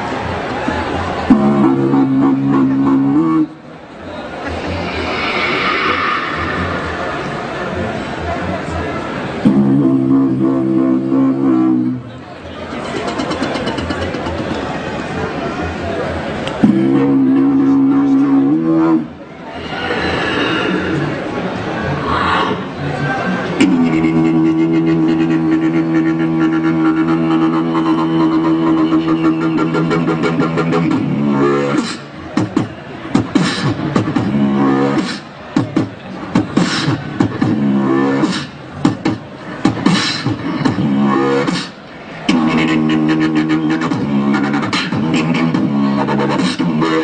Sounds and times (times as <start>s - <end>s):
Speech: 0.6s - 38.4s.